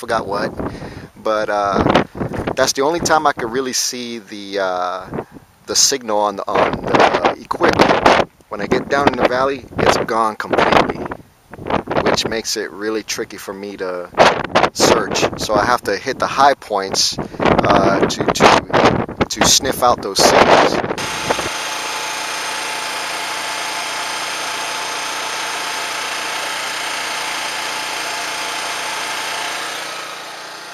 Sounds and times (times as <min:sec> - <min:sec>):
Wind noise (microphone): 0:00.2 - 0:03.4, 0:05.0 - 0:05.5, 0:06.5 - 0:12.5, 0:14.1 - 0:15.9, 0:16.8 - 0:21.5.